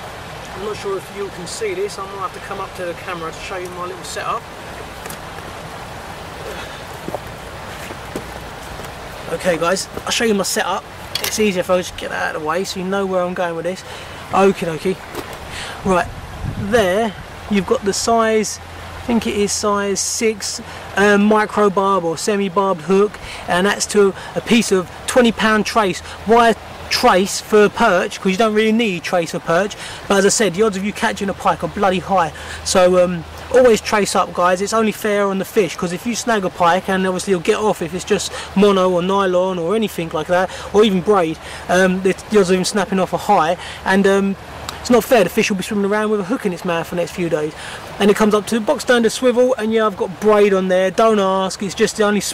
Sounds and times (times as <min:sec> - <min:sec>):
Outside, rural or natural: 0:00.0 - 0:52.3
Speech: 0:00.5 - 0:04.5, 0:09.3 - 0:15.0, 0:15.8 - 0:52.3.